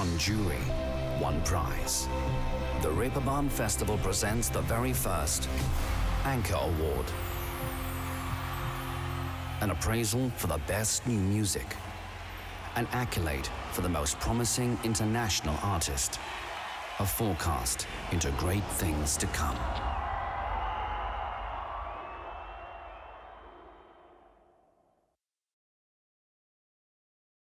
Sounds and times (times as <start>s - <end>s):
Speech: 0.0s - 2.1s, 2.8s - 5.5s, 6.2s - 7.2s, 9.6s - 11.8s, 12.7s - 16.2s, 17.0s - 19.8s.